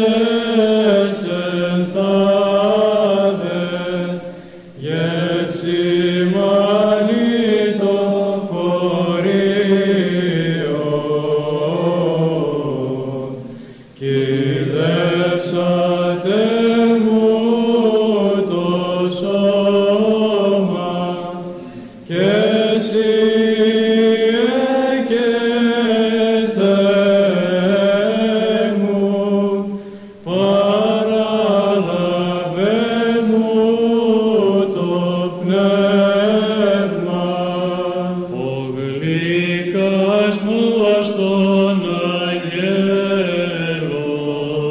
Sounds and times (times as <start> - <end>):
Mantra: 0.0 - 44.7.